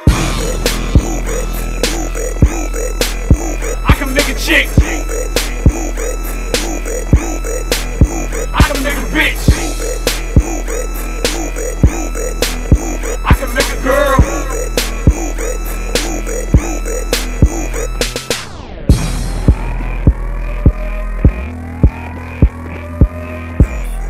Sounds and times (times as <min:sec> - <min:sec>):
Dance music: 0:00.0 - 0:24.0.